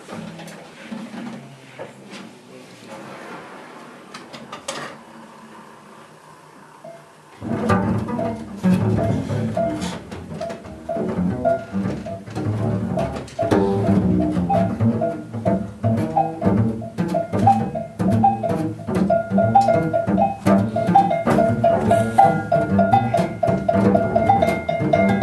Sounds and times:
Drum: 0:07.5 - 0:25.2.

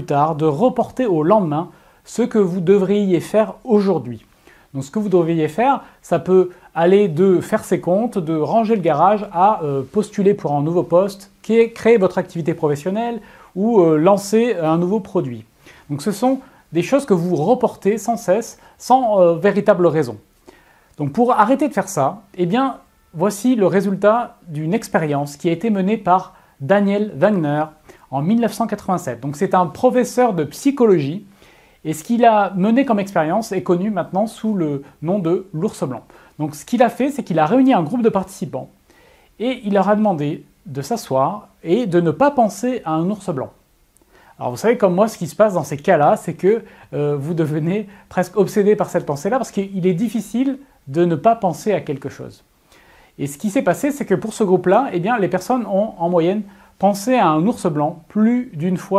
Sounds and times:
Speech: 0:00.0 - 0:20.3, 0:21.0 - 0:38.8, 0:39.4 - 0:43.6, 0:44.4 - 0:52.5, 0:53.2 - 0:58.9.

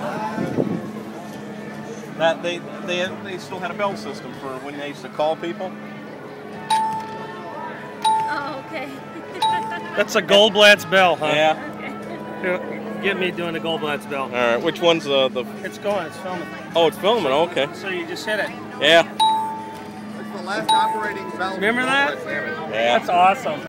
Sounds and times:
Music: 0:06.4 - 0:10.3, 0:16.4 - 0:22.4.

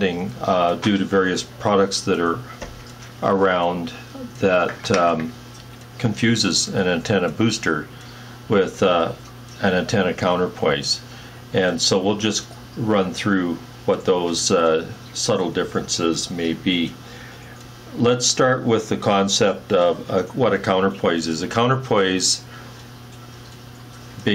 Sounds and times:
Speech: 0:00.0 - 0:02.5, 0:03.2 - 0:05.4, 0:06.0 - 0:07.9, 0:08.5 - 0:17.0, 0:17.9 - 0:22.5.

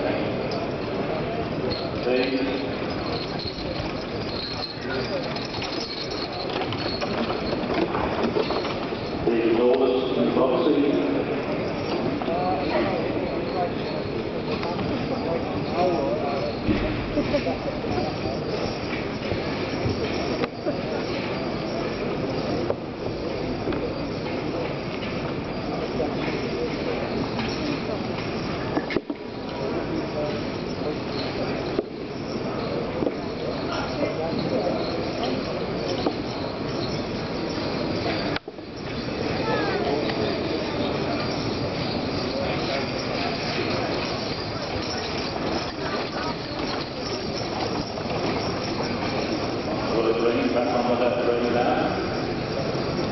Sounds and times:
Clip-clop: 0:00.4 - 0:10.0, 0:11.4 - 0:53.1.

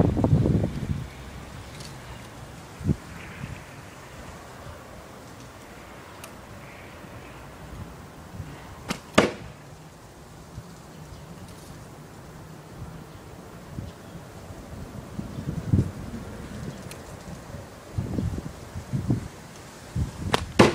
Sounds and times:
Arrow: 0:08.9 - 0:09.6, 0:20.3 - 0:20.7.

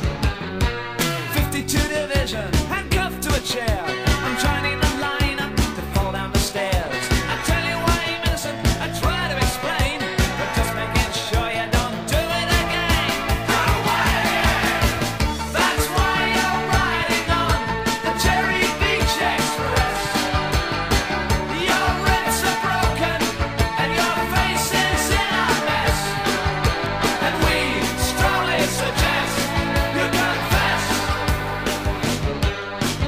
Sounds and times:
Music: 0:00.0 - 0:33.0.

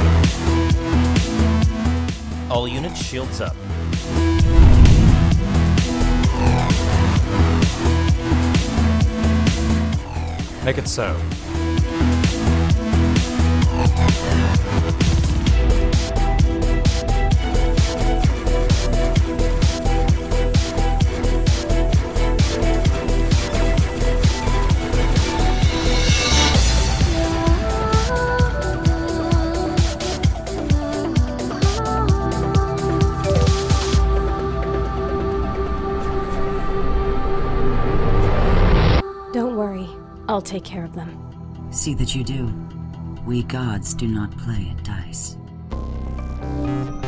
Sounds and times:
Music: 0:00.0 - 0:47.0
Speech: 0:02.5 - 0:03.6, 0:10.6 - 0:11.3, 0:39.3 - 0:42.6, 0:43.2 - 0:45.4.

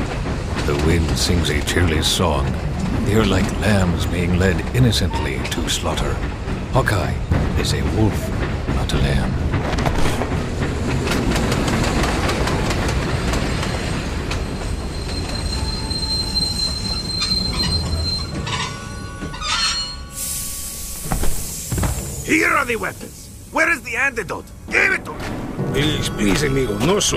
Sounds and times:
Speech: 0:00.6 - 0:09.4, 0:22.2 - 0:27.1.

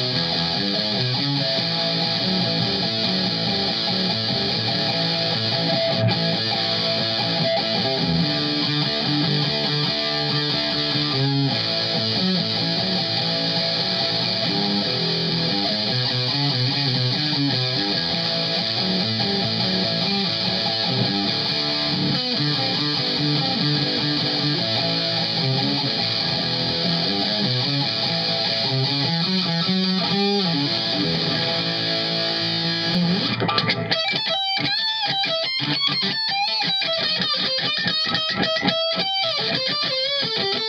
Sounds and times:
Guitar: 0:00.0 - 0:40.6.

